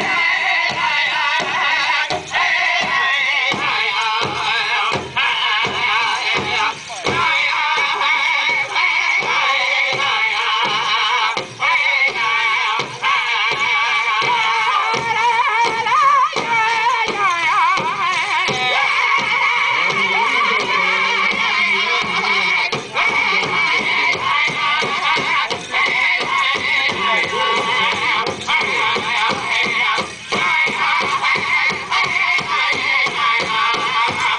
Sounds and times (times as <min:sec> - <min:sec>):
Music: 0:00.0 - 0:34.3
Speech: 0:19.7 - 0:24.2, 0:26.9 - 0:28.2.